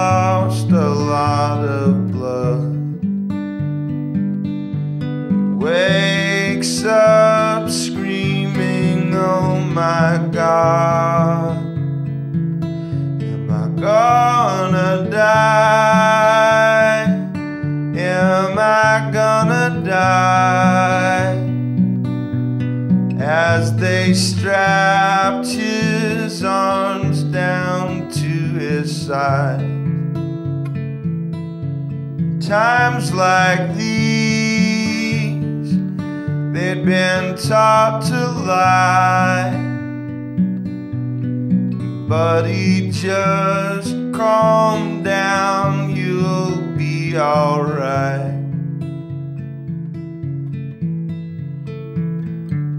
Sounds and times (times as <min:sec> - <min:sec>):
Music: 0:00.0 - 0:52.7.